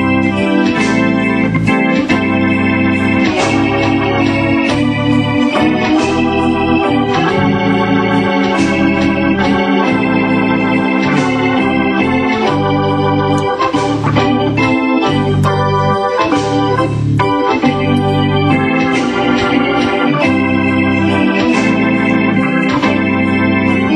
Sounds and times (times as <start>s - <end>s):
Electronic organ: 0.0s - 23.9s.